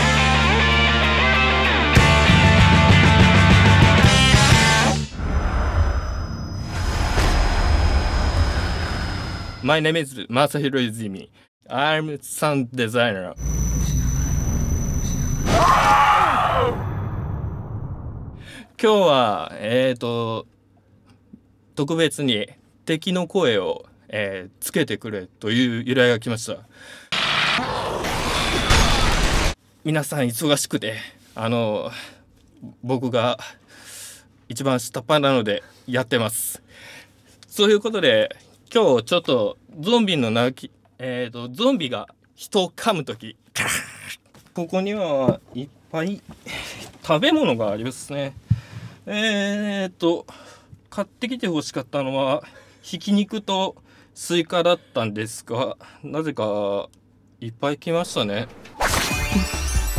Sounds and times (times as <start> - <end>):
Speech: 9.6 - 13.4, 18.8 - 20.5, 21.8 - 26.7, 29.8 - 33.6, 34.5 - 36.6, 37.5 - 46.2, 47.0 - 48.4, 49.1 - 50.3, 50.9 - 58.5.